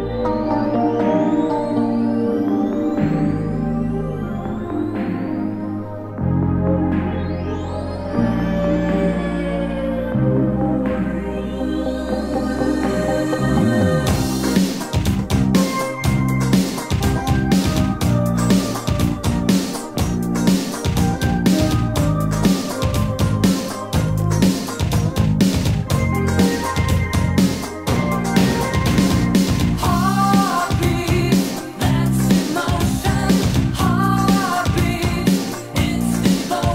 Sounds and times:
Music: 0.0 - 36.7.

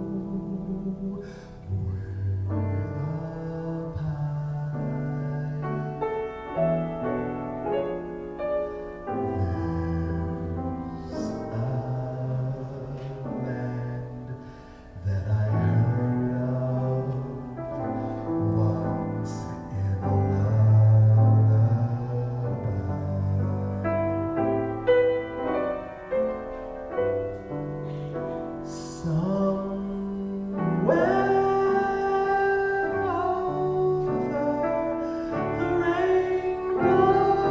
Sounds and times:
Male singing: 0.0 - 6.1, 9.1 - 14.4, 15.0 - 24.0, 28.6 - 37.5
Music: 0.0 - 37.5.

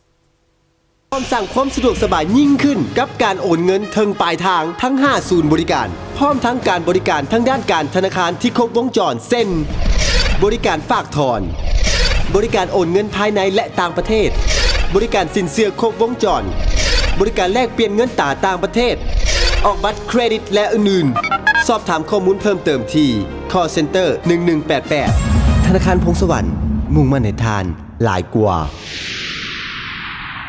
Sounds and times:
Music: 1.1 - 28.2
Speech: 1.2 - 9.7, 10.4 - 11.6, 12.3 - 16.5, 17.2 - 19.0, 19.6 - 28.8.

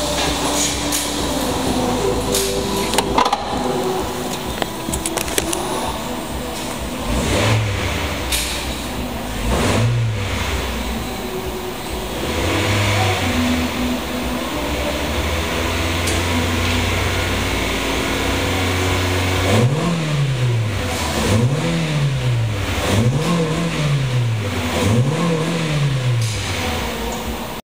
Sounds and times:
Car: 0.0 - 27.6
Accelerating, revving, vroom: 7.0 - 8.7, 9.3 - 10.8, 12.2 - 13.8, 14.6 - 26.9.

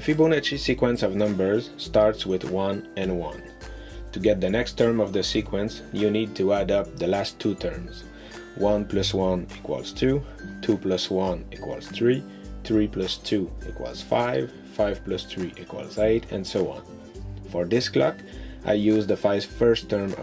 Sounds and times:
Speech: 0.0 - 3.5, 4.1 - 8.0, 8.6 - 16.9, 17.5 - 20.2
Music: 0.0 - 20.2.

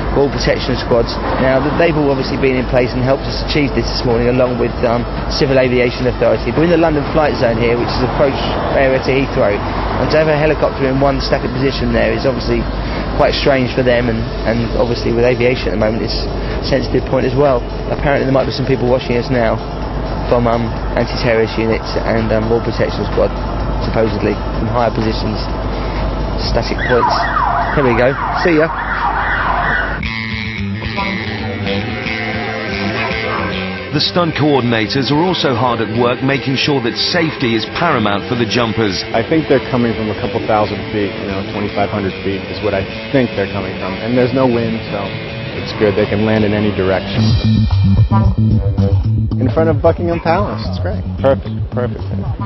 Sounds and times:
Music: 0.0 - 28.4, 30.0 - 52.4
Speech: 0.1 - 19.6, 20.3 - 25.5, 26.4 - 27.2, 27.8 - 28.8, 33.9 - 47.4, 49.4 - 52.4
Police car (siren): 26.7 - 30.0.

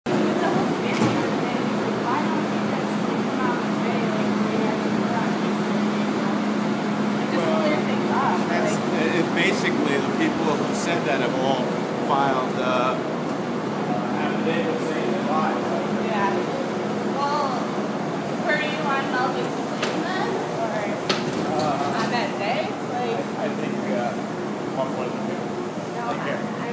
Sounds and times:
Traffic noise, roadway noise: 0.1 - 26.7.

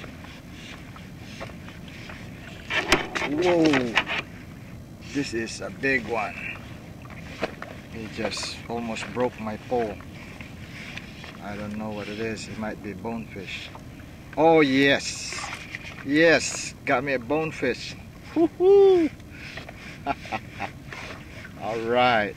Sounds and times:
Rowboat, canoe, kayak: 0.0 - 22.3
Speech: 3.2 - 4.0, 5.1 - 6.6, 8.0 - 10.0, 11.4 - 13.7, 14.4 - 15.5, 16.1 - 18.0, 21.6 - 22.3.

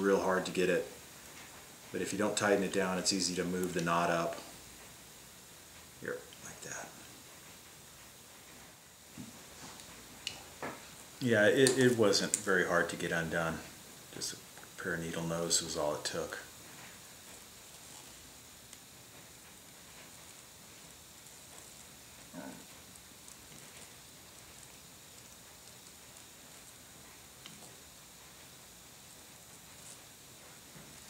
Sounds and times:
Speech: 0.0 - 1.0, 1.9 - 4.5, 6.0 - 7.0, 11.2 - 16.5
Inside, small room: 0.0 - 31.0.

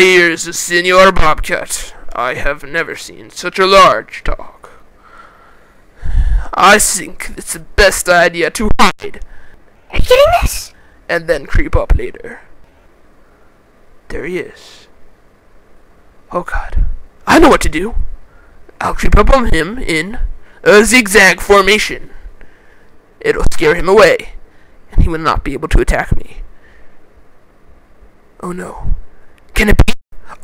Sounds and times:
Speech: 0.0 - 4.8, 6.5 - 9.2, 9.9 - 12.5, 14.1 - 14.9, 16.3 - 18.0, 18.8 - 22.2, 23.2 - 26.4, 28.4 - 30.4.

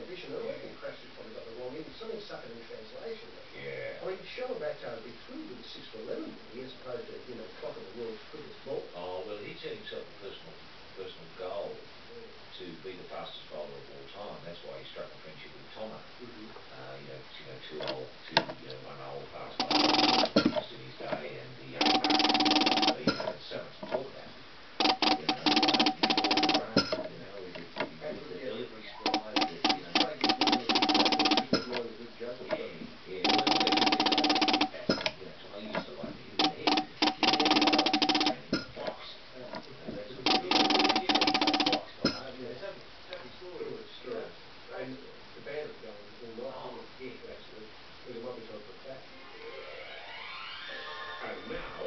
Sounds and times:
Speech: 0.0 - 49.3, 50.7 - 51.8.

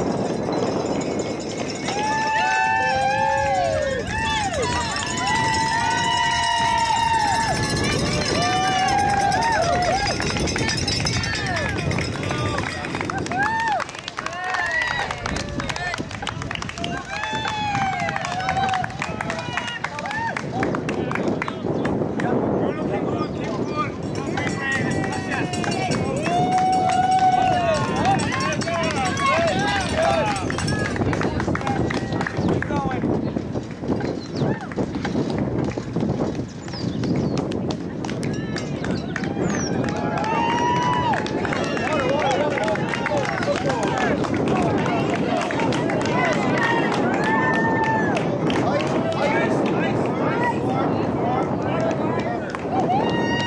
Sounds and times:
Run: 0.0 - 53.4.

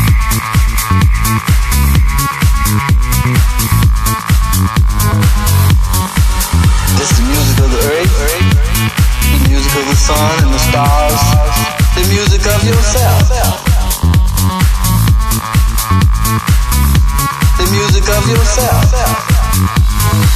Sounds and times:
Dance music: 0.0 - 20.3
House music: 0.0 - 20.3
Speech: 7.0 - 8.7, 9.3 - 13.6, 17.6 - 19.4.

